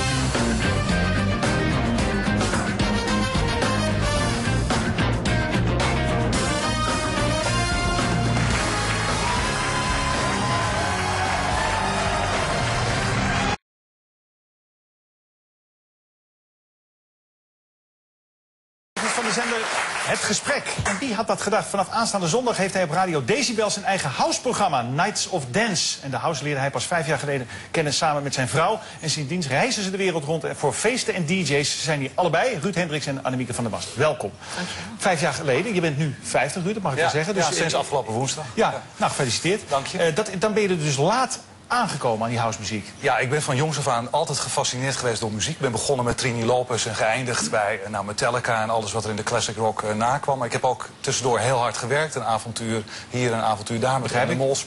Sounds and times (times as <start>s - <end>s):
Speech: 19.0s - 34.4s, 35.0s - 54.6s.